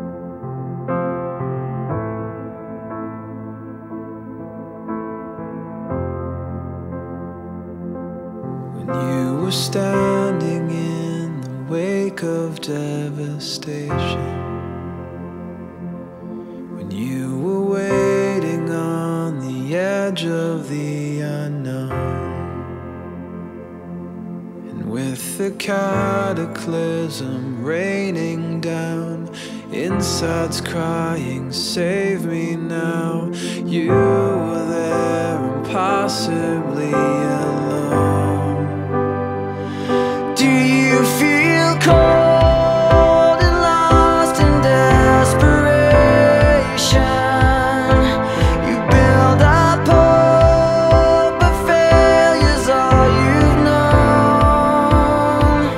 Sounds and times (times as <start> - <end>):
Music: 0.0 - 55.7.